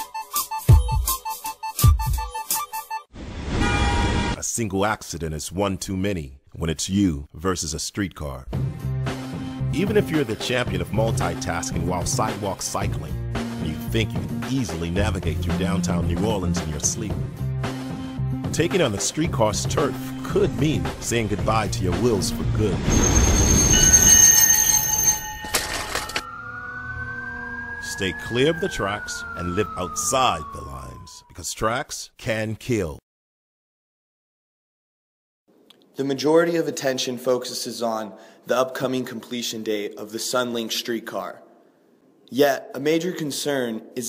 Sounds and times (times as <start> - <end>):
Music: 0.0 - 3.1, 8.5 - 23.5
Speech: 4.4 - 8.5, 9.7 - 17.2, 18.5 - 22.9, 27.8 - 33.0, 36.0 - 41.4, 42.3 - 44.0
Vehicle: 26.0 - 28.4.